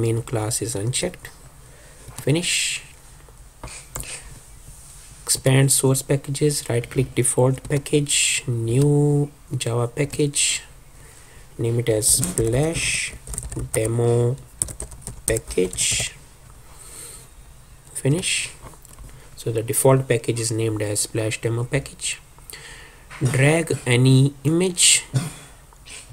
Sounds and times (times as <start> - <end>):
Speech: 0.0 - 1.4, 2.2 - 3.0, 5.3 - 10.7, 11.6 - 14.4, 15.3 - 16.2, 17.9 - 18.6, 19.4 - 22.2, 23.2 - 25.2.